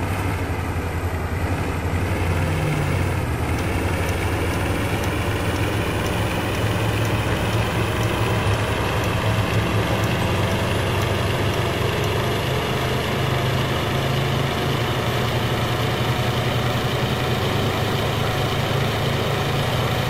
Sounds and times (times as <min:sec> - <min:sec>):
Vehicle: 0:00.0 - 0:20.1.